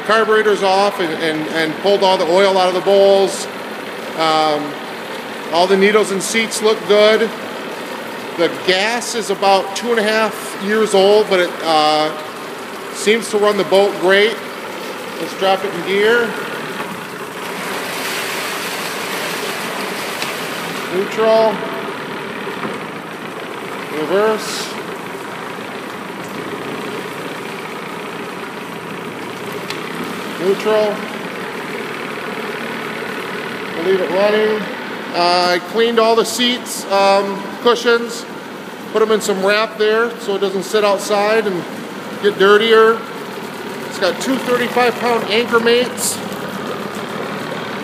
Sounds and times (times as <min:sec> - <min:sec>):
Speech: 0:00.0 - 0:03.6, 0:04.2 - 0:04.8, 0:05.5 - 0:07.4, 0:08.4 - 0:12.3, 0:13.0 - 0:14.4, 0:15.2 - 0:16.5, 0:20.9 - 0:21.7, 0:23.9 - 0:24.8, 0:30.4 - 0:31.1, 0:33.8 - 0:38.3, 0:38.9 - 0:43.1, 0:43.9 - 0:46.2.